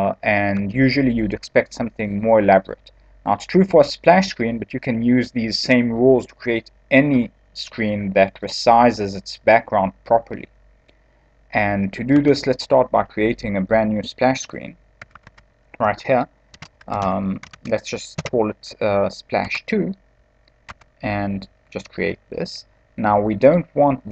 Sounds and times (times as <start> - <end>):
Speech: 0.0 - 10.5, 11.6 - 14.8, 15.8 - 16.3, 16.9 - 20.0, 21.0 - 24.1.